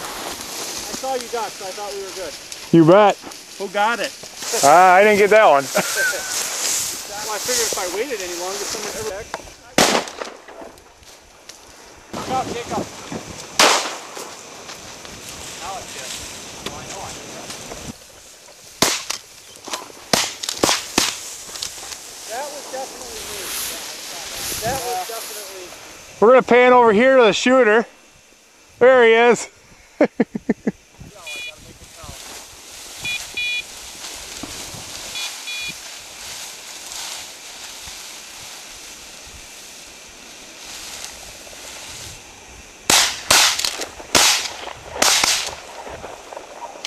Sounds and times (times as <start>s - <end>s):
Speech: 0.9s - 5.7s, 7.1s - 9.8s, 12.2s - 12.9s, 22.3s - 27.9s, 31.1s - 32.2s.